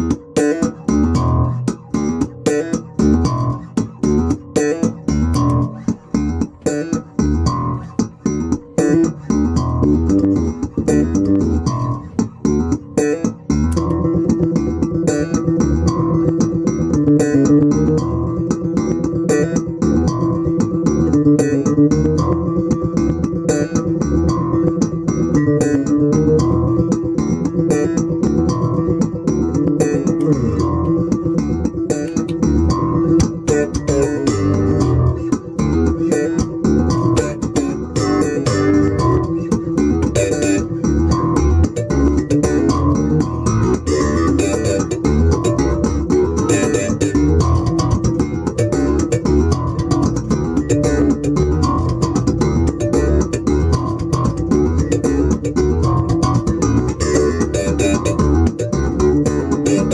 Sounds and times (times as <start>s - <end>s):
Guitar: 0.0s - 59.9s.